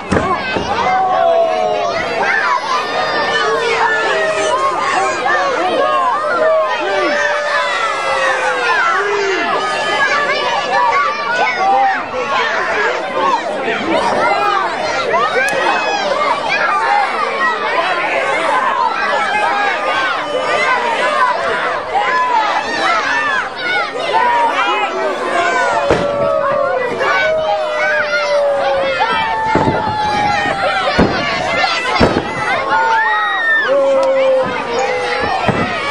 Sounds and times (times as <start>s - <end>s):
Speech: 0.0s - 35.9s.